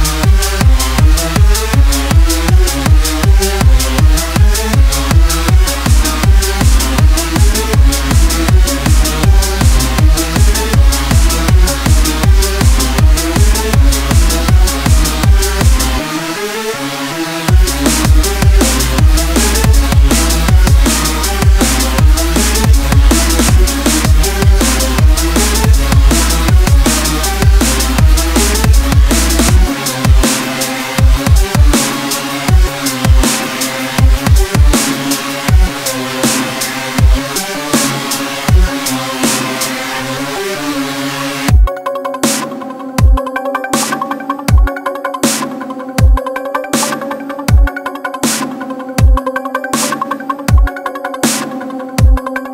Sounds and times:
Drum and bass: 0:00.0 - 0:52.5
Dubstep: 0:00.0 - 0:52.5.

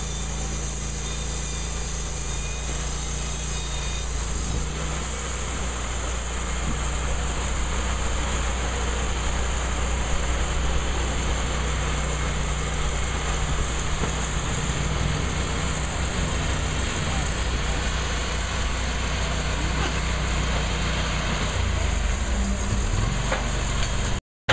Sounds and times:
Outside, urban or manmade: 0:00.0 - 0:24.5
Wood: 0:06.6 - 0:07.0, 0:11.4 - 0:21.6.

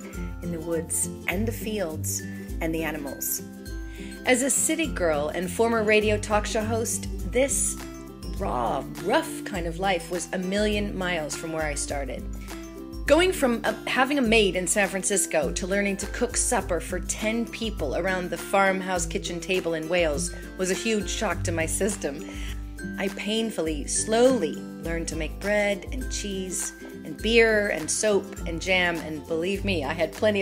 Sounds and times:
Music: 0:00.0 - 0:30.4
Speech: 0:00.4 - 0:03.4, 0:04.3 - 0:12.2, 0:13.1 - 0:22.3, 0:23.0 - 0:30.4.

